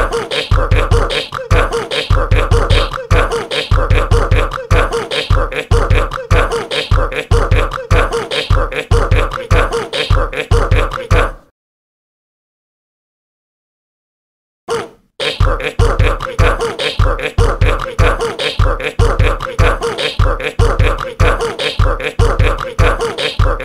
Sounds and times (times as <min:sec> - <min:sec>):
Music: 0:00.3 - 0:09.4, 0:15.3 - 0:23.6.